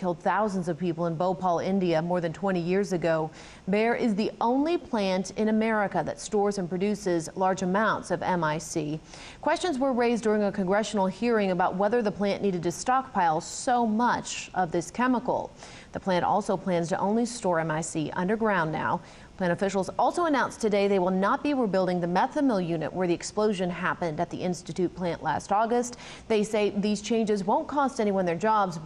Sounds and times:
Speech: 0.0 - 28.8.

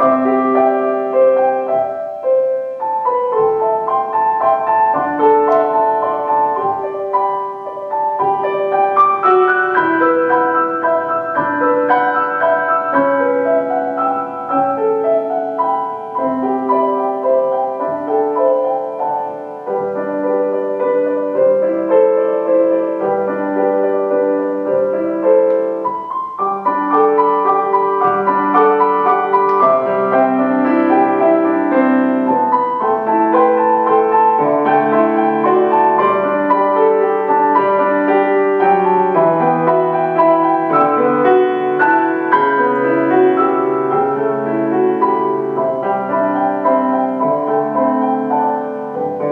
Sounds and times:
Music: 0.0 - 49.3.

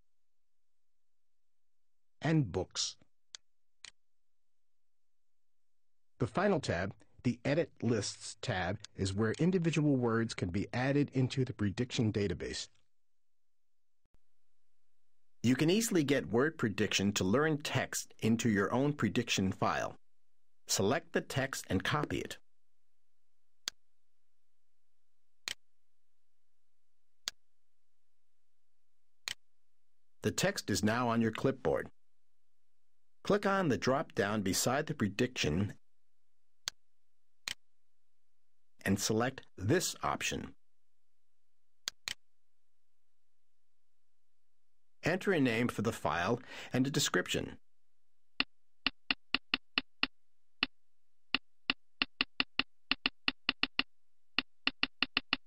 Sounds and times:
Speech: 2.2 - 3.0, 6.2 - 12.8, 15.5 - 20.0, 20.7 - 22.4, 30.2 - 32.0, 33.2 - 35.8, 38.8 - 40.6, 45.0 - 47.6.

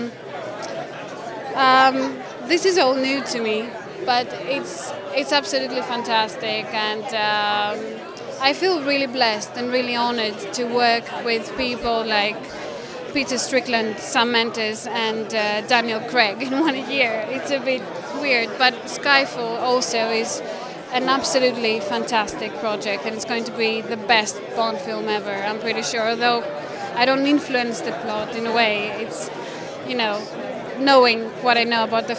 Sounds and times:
Speech: 1.6 - 32.1.

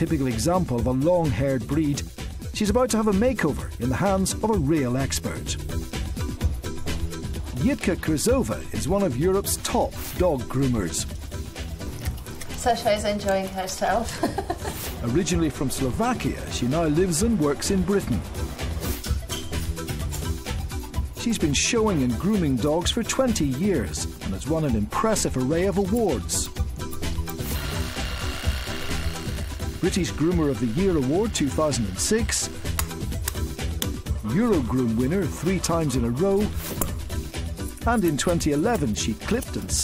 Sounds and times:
Speech: 0.0 - 5.6, 7.6 - 11.1, 12.6 - 14.2, 15.0 - 18.2, 21.2 - 26.5, 29.8 - 32.6, 34.2 - 36.5, 37.8 - 39.8
Music: 0.0 - 39.8.

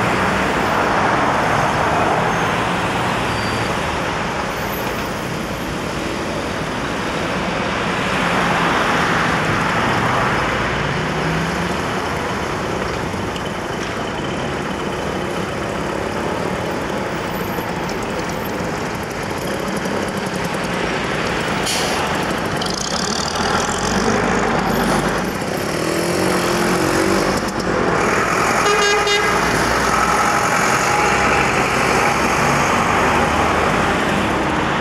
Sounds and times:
Bus: 0.0 - 34.8
Car: 0.0 - 34.8.

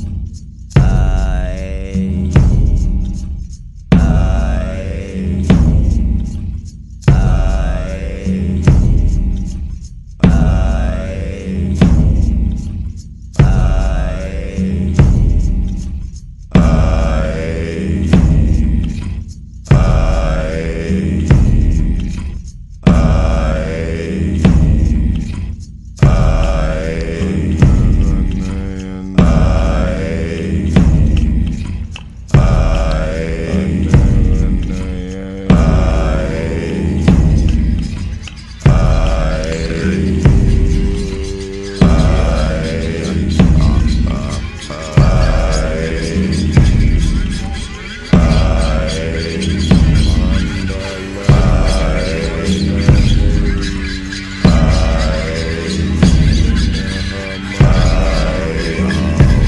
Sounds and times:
Mantra: 0.0 - 59.4.

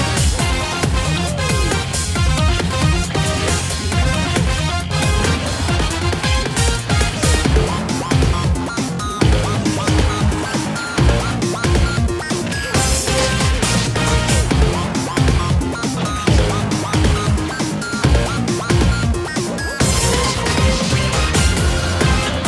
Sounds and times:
Music: 0.0 - 22.4.

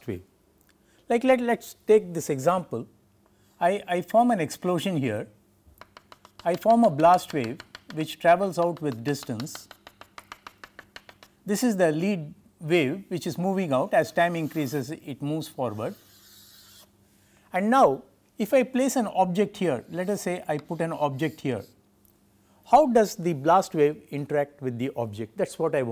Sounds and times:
Speech: 0.0 - 0.3, 1.1 - 2.9, 3.6 - 5.4, 6.4 - 9.7, 11.5 - 16.0, 17.5 - 21.8, 22.7 - 25.9.

